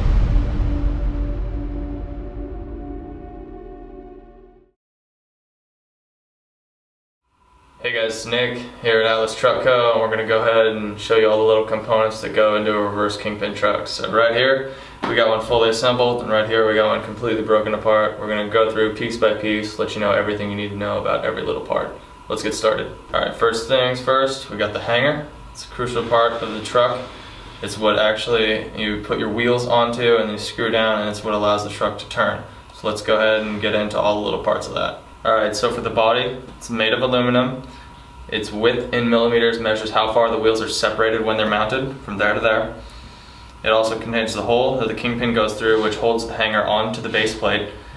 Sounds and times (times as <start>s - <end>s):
Speech: 7.8s - 37.7s, 38.3s - 42.8s, 43.6s - 47.8s.